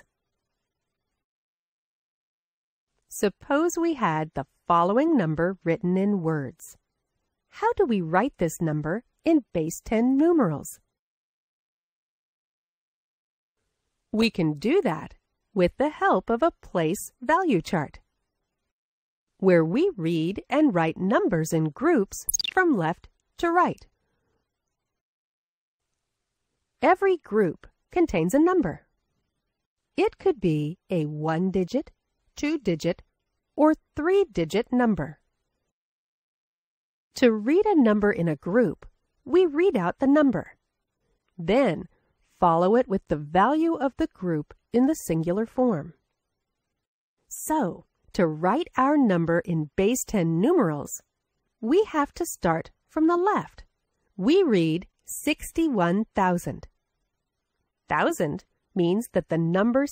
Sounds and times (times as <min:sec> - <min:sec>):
Speech: 0:03.1 - 0:06.8, 0:07.6 - 0:10.9, 0:14.2 - 0:18.0, 0:19.4 - 0:23.9, 0:26.8 - 0:28.8, 0:30.0 - 0:33.0, 0:33.6 - 0:35.2, 0:37.2 - 0:40.6, 0:41.4 - 0:46.0, 0:47.3 - 0:51.0, 0:51.6 - 0:53.6, 0:54.2 - 0:56.7, 0:57.9 - 0:59.9.